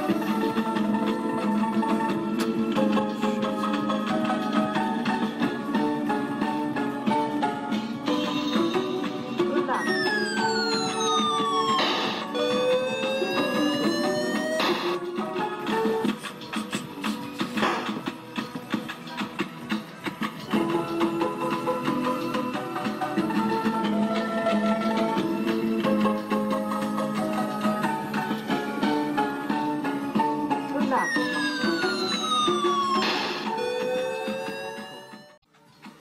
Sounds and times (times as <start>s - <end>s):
Music: 0.0s - 36.0s
Speech: 30.7s - 31.1s.